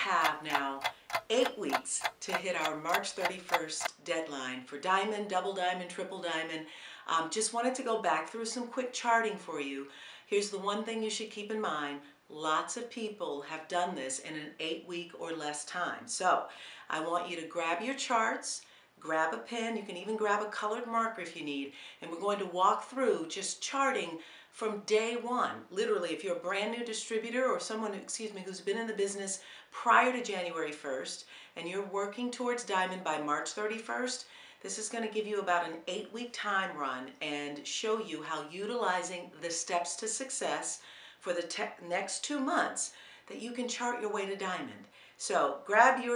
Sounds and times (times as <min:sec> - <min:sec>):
Speech: 0:00.0 - 0:46.1.